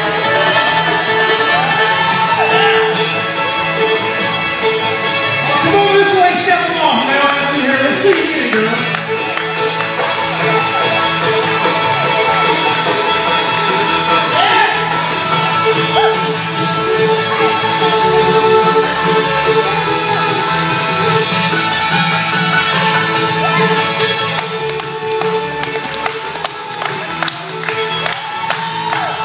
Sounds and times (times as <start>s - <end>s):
Music: 0.0s - 29.2s
Applause: 6.0s - 14.2s, 23.5s - 29.2s.